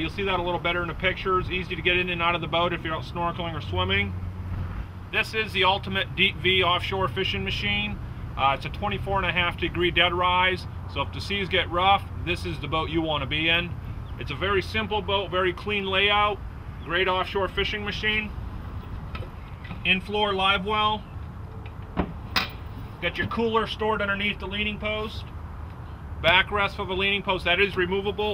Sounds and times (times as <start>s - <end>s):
Speech: 0.0s - 4.1s, 5.2s - 18.3s, 19.8s - 21.0s, 23.0s - 25.3s, 26.2s - 28.3s
Boat, Water vehicle: 0.0s - 28.3s.